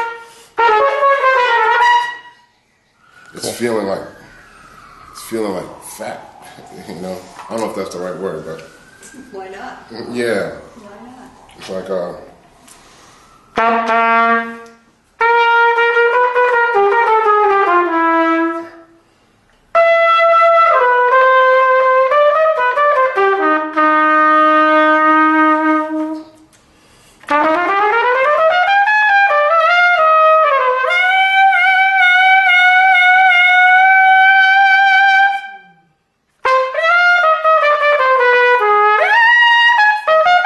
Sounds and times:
Trumpet: 0.0 - 2.5, 13.3 - 19.0, 19.7 - 26.5, 27.2 - 40.4.

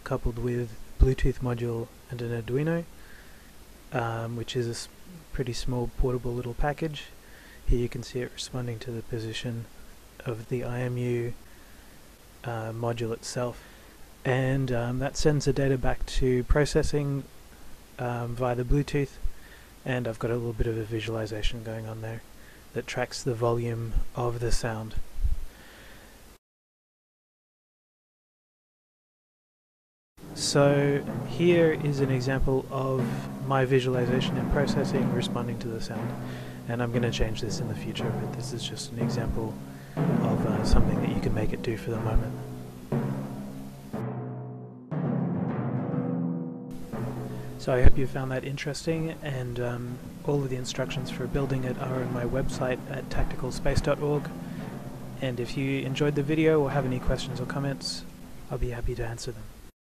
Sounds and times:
Speech: 0.0 - 2.9, 3.9 - 11.4, 12.4 - 13.6, 14.2 - 17.3, 18.0 - 25.1, 30.4 - 39.6, 40.2 - 42.4, 47.6 - 54.4, 55.2 - 59.5.

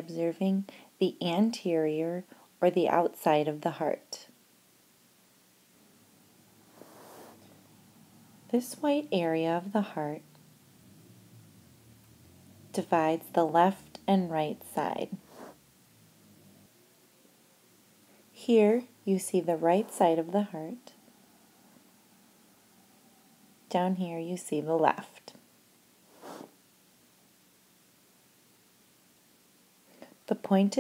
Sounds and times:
Speech: 0.0 - 4.3, 8.5 - 10.2, 12.8 - 15.2, 18.4 - 20.9, 23.7 - 25.4, 30.3 - 30.8.

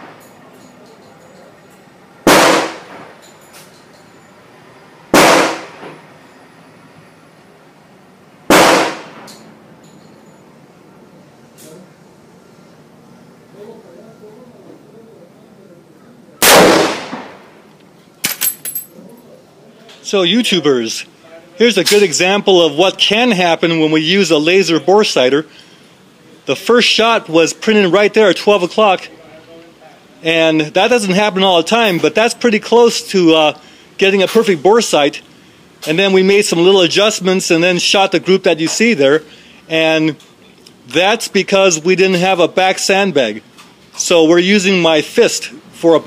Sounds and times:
Gunshot, gunfire: 2.3 - 3.1, 5.2 - 5.8, 8.5 - 9.3, 16.4 - 17.4.

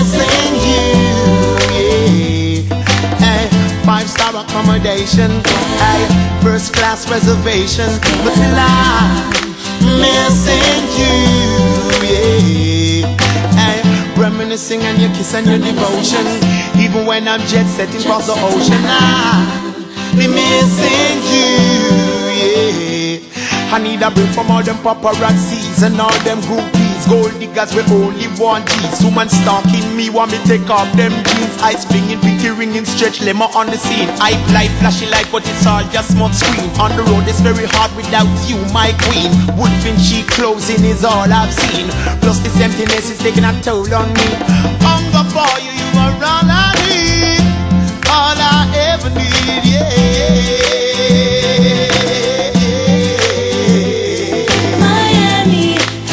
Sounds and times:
Maraca: 0.0 - 56.1.

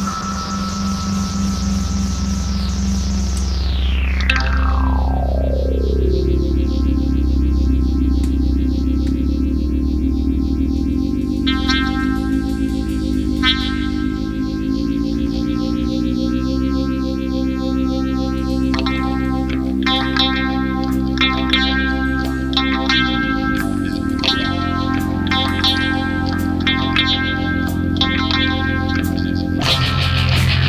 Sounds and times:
Progressive rock: 0.0 - 30.6.

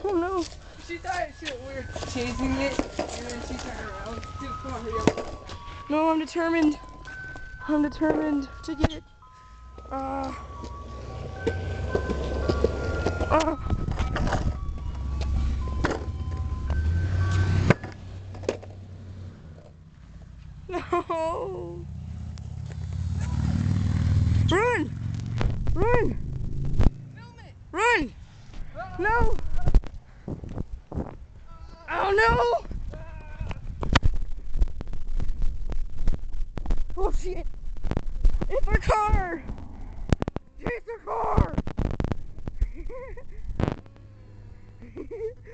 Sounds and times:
Car: 0.1 - 45.5.

